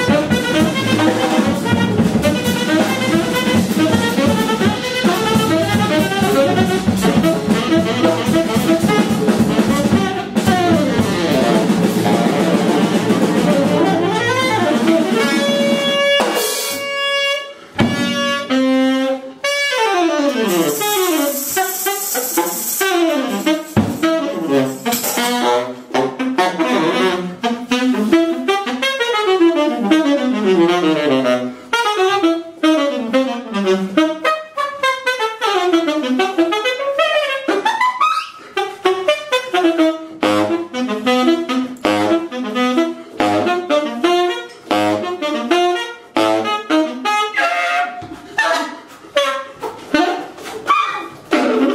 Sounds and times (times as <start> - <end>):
Wind instrument, woodwind instrument: 0.0 - 51.7.